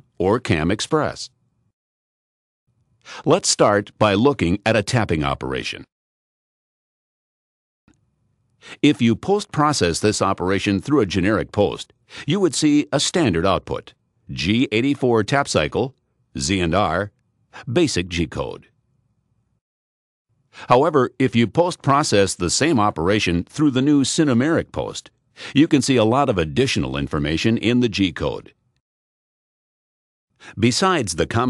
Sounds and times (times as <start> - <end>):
Speech: 0.0 - 1.4, 3.2 - 5.9, 8.8 - 18.7, 20.6 - 28.6, 30.5 - 31.5.